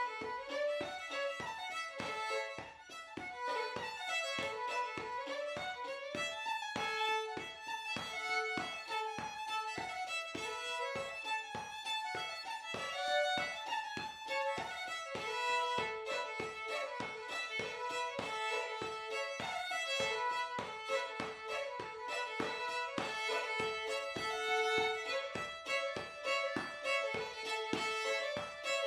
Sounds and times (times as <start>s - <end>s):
Violin, fiddle: 0.0s - 28.8s.